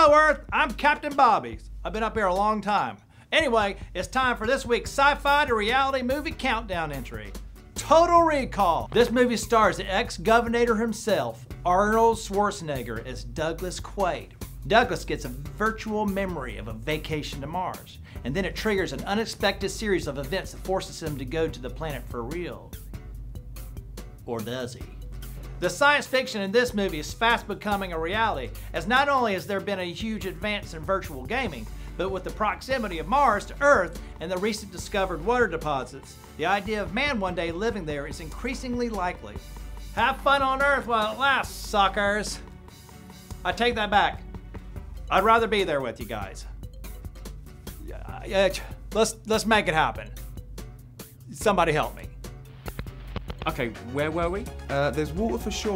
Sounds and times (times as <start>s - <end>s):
Speech: 0.0s - 22.8s, 24.2s - 25.0s, 25.6s - 39.4s, 40.0s - 42.4s, 43.4s - 44.2s, 45.1s - 46.5s, 47.8s - 50.2s, 51.3s - 52.2s, 53.4s - 55.7s
Music: 0.0s - 55.7s.